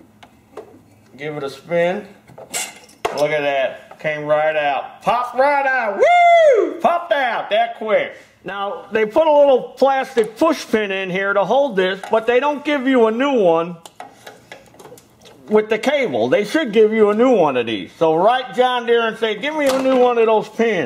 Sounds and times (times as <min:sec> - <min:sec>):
Speech: 0:01.2 - 0:02.2, 0:03.1 - 0:06.0, 0:06.8 - 0:13.8, 0:15.5 - 0:20.8.